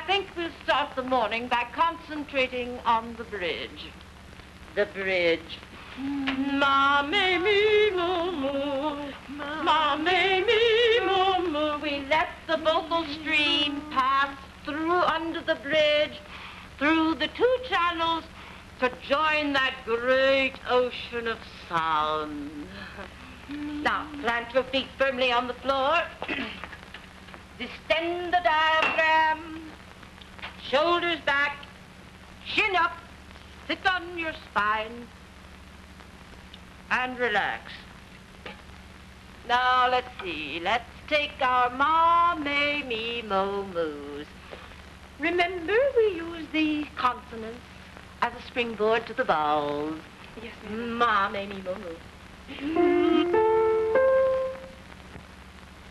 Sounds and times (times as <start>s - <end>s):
Female singing: 0.0s - 3.9s, 4.8s - 26.6s, 27.6s - 29.8s, 30.6s - 31.7s, 39.5s - 44.4s, 45.2s - 47.6s, 48.2s - 53.6s
Speech: 0.0s - 3.9s, 4.8s - 5.6s, 32.5s - 33.0s, 33.7s - 35.1s, 36.9s - 37.9s, 48.2s - 52.8s.